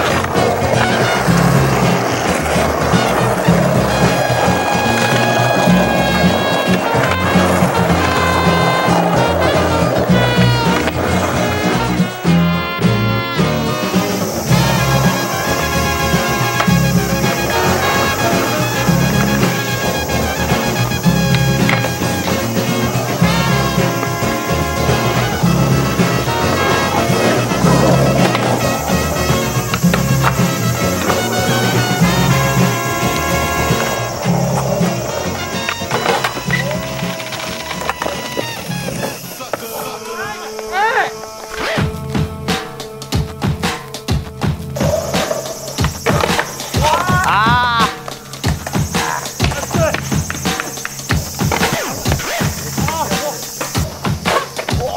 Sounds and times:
Music: 0.0s - 54.9s
Skateboard: 0.0s - 54.9s.

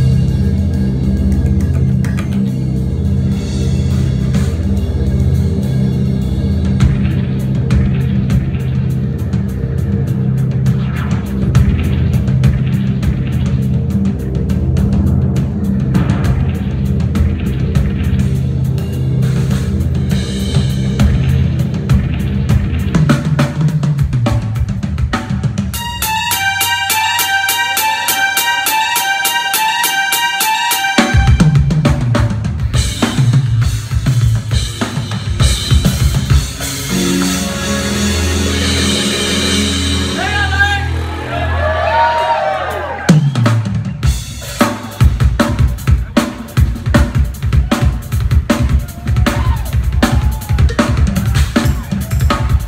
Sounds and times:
Bass drum: 0.0s - 25.7s, 31.2s - 37.3s, 43.1s - 52.6s
Drum kit: 0.0s - 52.6s.

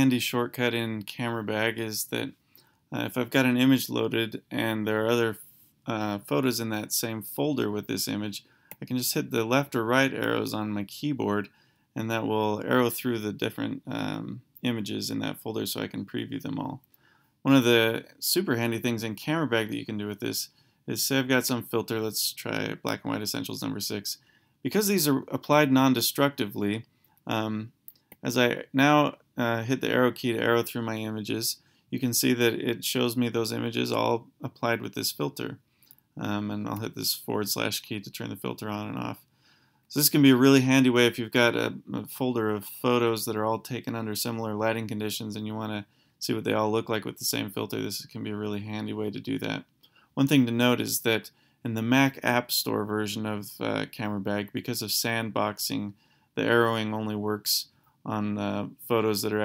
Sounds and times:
Speech: 0.0s - 35.6s, 36.2s - 39.3s, 39.9s - 59.4s.

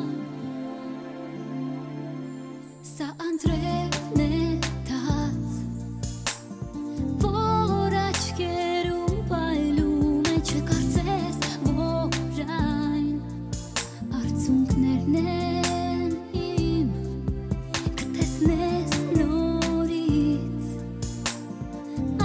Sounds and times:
Music: 0.0s - 22.2s.

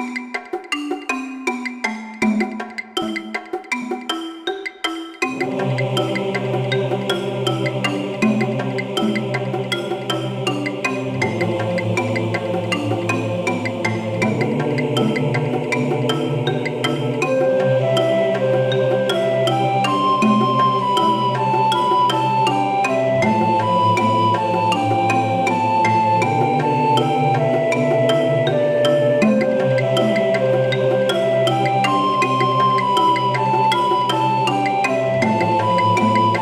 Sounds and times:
Music: 0.0s - 36.4s.

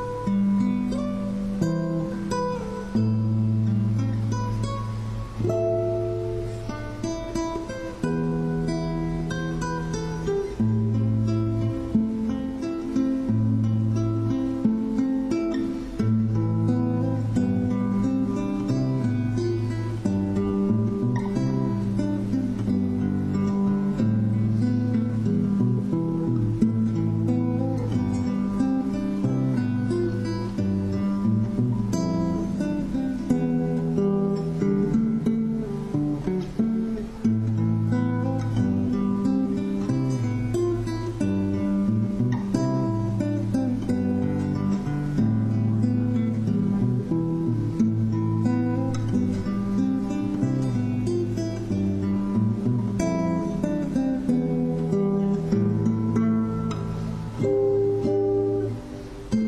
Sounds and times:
Strum: 0.0s - 59.4s.

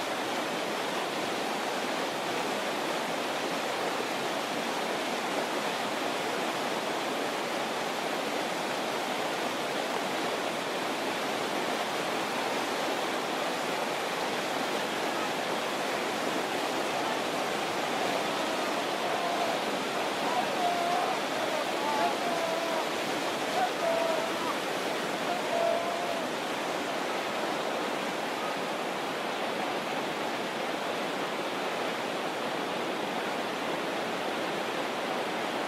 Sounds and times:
Stream: 0.0s - 35.6s
Speech: 16.8s - 26.5s.

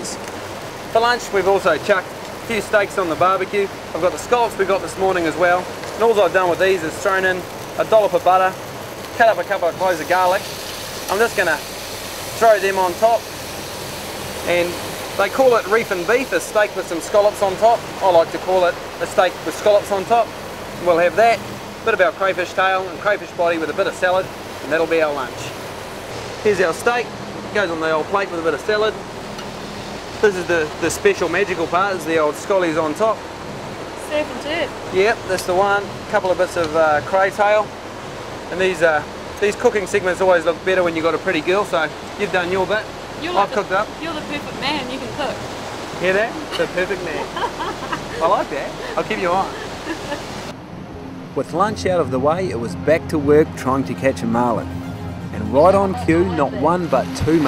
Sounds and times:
Outside, rural or natural: 0.0s - 57.4s.

